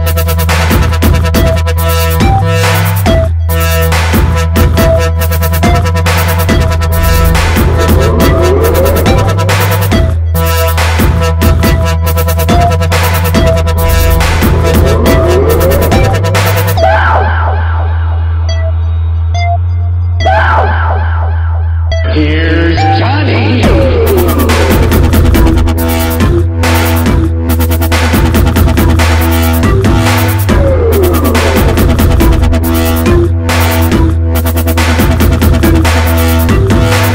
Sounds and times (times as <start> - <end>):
Dubstep: 0.0 - 19.6, 22.0 - 37.1.